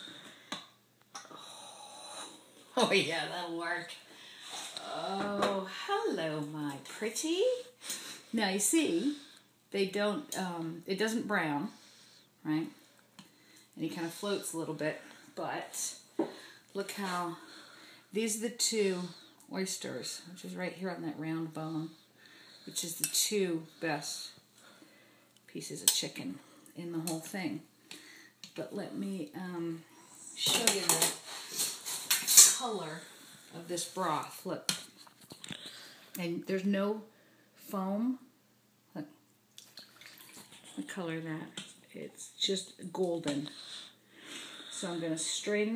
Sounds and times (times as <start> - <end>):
Speech: 2.8 - 4.0, 4.8 - 7.7, 8.4 - 9.2, 30.4 - 31.2, 33.6 - 34.7, 36.2 - 38.3, 40.8 - 43.5, 44.8 - 45.7.